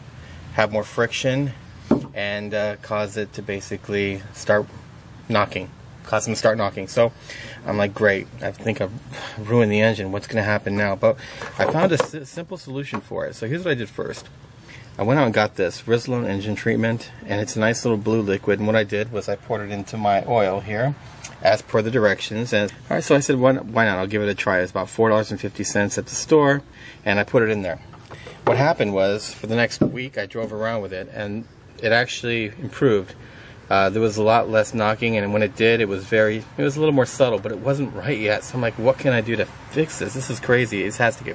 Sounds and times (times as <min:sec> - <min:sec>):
Speech: 0:00.5 - 0:14.3, 0:15.0 - 0:41.3.